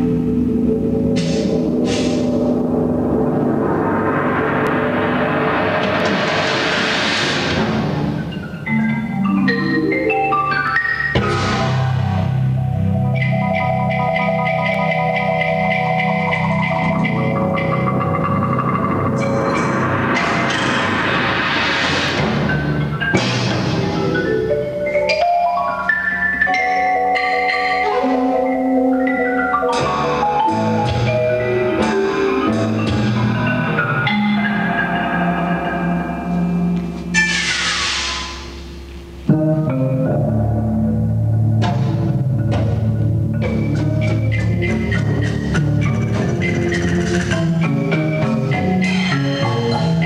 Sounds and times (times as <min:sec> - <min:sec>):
Tubular bells: 0:08.0 - 0:21.2, 0:22.2 - 0:37.3.